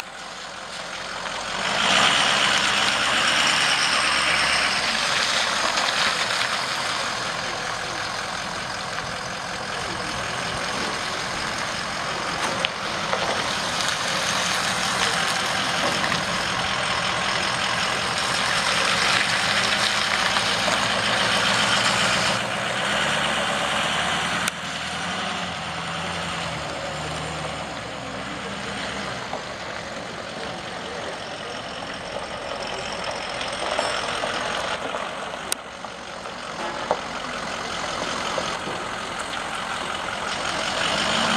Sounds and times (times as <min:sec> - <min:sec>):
Outside, urban or manmade: 0:00.0 - 0:41.3
Truck: 0:00.0 - 0:41.3.